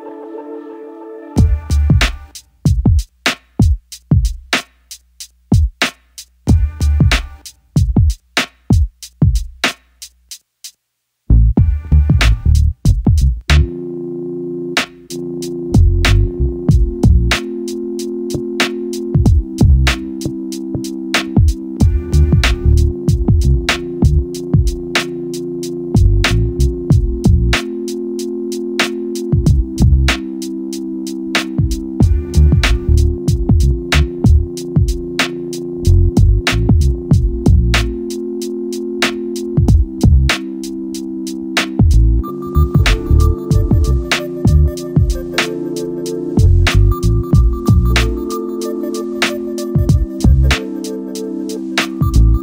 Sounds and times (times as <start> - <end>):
Drum kit: 1.4 - 10.8, 11.6 - 13.7, 14.8 - 52.4.